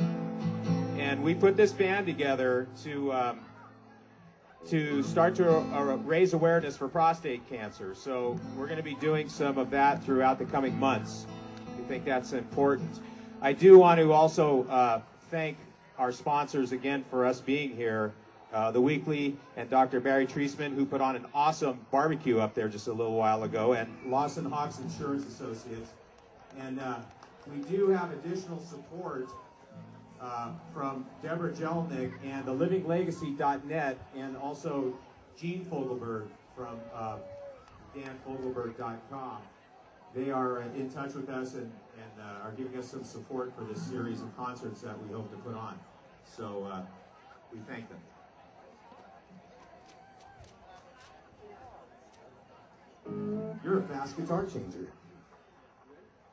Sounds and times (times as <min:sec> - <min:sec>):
Music: 0:00.0 - 0:02.9, 0:05.0 - 0:06.1, 0:08.4 - 0:13.7, 0:53.1 - 0:54.0
Speech: 0:01.0 - 0:03.8, 0:04.6 - 0:29.4, 0:30.2 - 0:37.3, 0:37.9 - 0:48.1, 0:53.1 - 0:55.1.